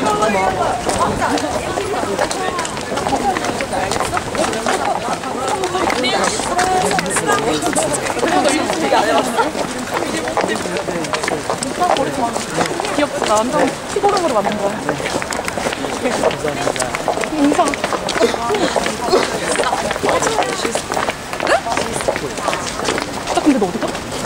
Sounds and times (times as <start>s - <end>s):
Speech: 0.0s - 24.2s.